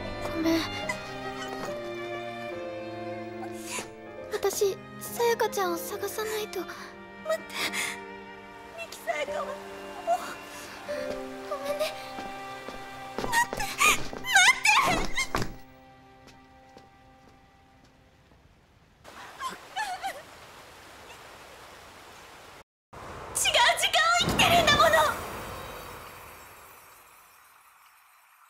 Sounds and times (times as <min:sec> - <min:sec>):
Music: 0:00.0 - 0:18.0
Speech: 0:04.3 - 0:06.8, 0:23.4 - 0:25.2.